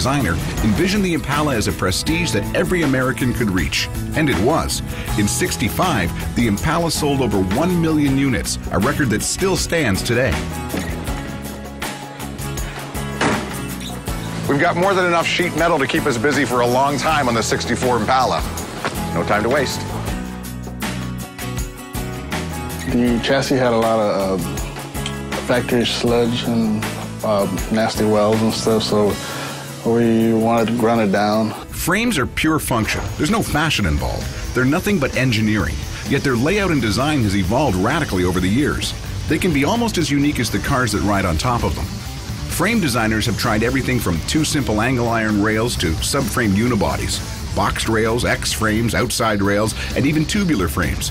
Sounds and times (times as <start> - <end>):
Speech: 0.0 - 10.4, 14.5 - 18.5, 19.2 - 19.9, 22.8 - 24.5, 25.4 - 29.2, 29.8 - 41.9, 42.6 - 51.1
Music: 0.0 - 51.1.